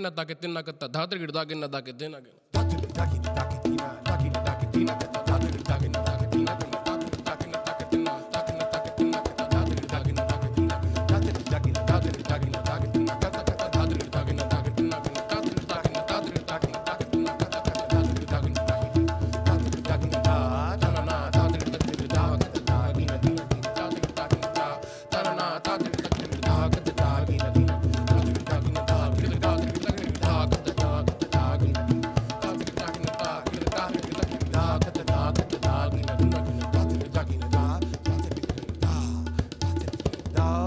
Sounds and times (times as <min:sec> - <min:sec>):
Percussion: 0:02.5 - 0:40.6.